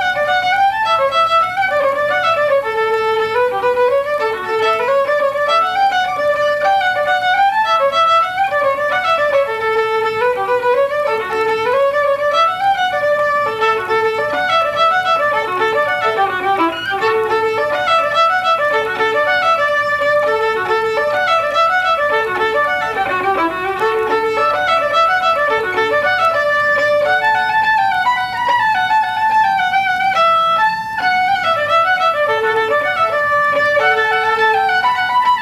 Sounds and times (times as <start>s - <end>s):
Violin, fiddle: 0.0s - 35.4s.